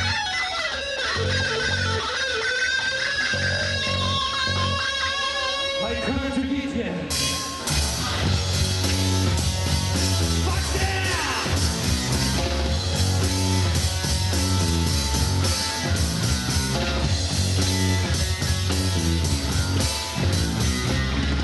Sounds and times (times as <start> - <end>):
Bass guitar: 0.0 - 21.4
Psychedelic rock: 0.0 - 21.4
Speech: 5.8 - 7.1, 10.4 - 11.6
Percussion: 7.1 - 21.4.